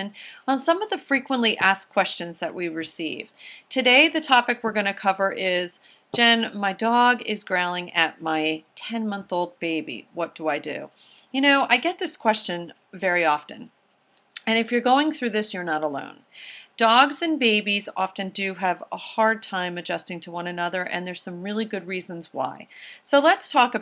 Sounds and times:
Speech: 0.0 - 13.7, 14.4 - 16.2, 16.8 - 23.8.

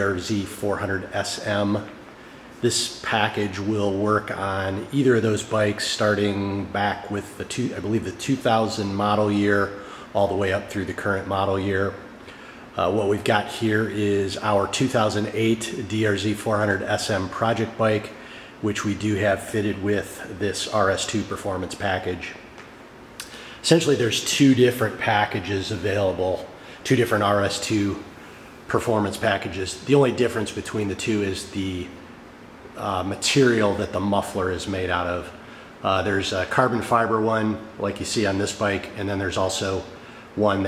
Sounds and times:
Speech: 0.0 - 2.0, 2.6 - 12.1, 12.7 - 22.5, 23.2 - 32.1, 32.7 - 40.6.

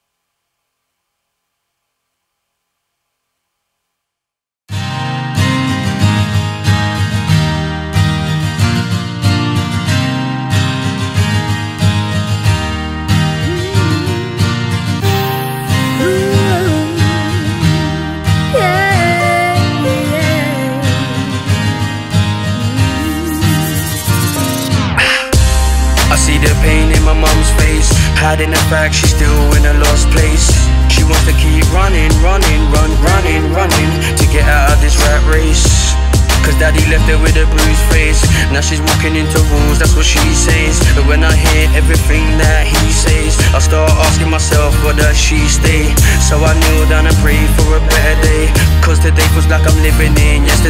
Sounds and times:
Music: 4.7 - 50.6.

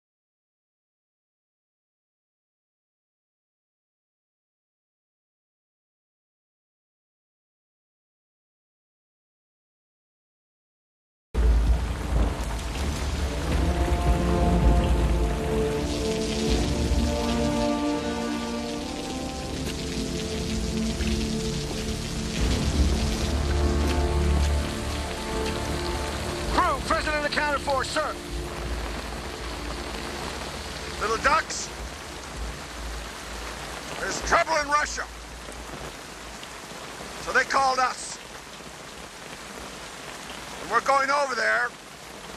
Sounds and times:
Narration, monologue: 12.8 - 32.2, 33.8 - 35.6, 37.0 - 38.4, 40.6 - 41.8
Male speech, man speaking: 26.5 - 28.2, 31.0 - 31.7, 34.0 - 35.1, 37.2 - 38.2, 40.6 - 41.8.

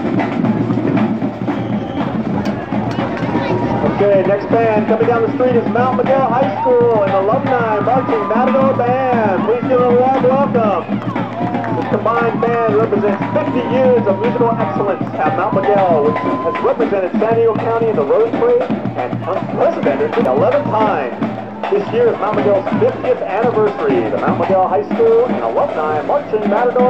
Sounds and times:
Music: 0.0 - 26.9
Speech: 2.5 - 11.1, 11.7 - 26.9.

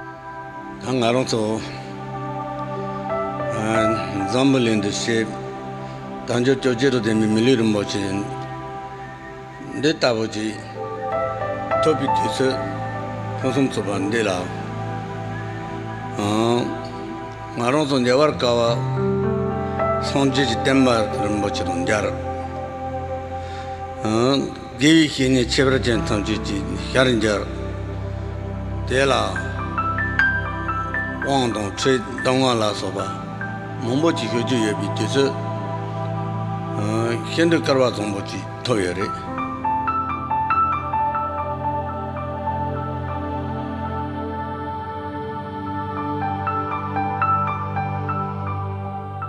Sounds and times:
Music: 0.0 - 49.2
Speech: 0.8 - 1.8, 3.5 - 5.4, 6.3 - 8.4, 9.6 - 10.8, 11.8 - 12.6, 13.4 - 14.6, 16.2 - 16.8, 17.5 - 19.0, 20.0 - 22.2, 24.0 - 27.6, 28.9 - 29.6, 31.2 - 33.2, 33.8 - 35.4, 36.8 - 39.3.

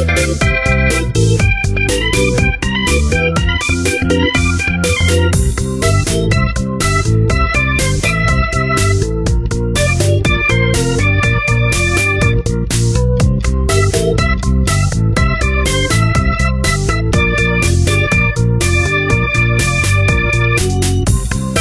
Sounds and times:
Music: 0.0 - 21.6.

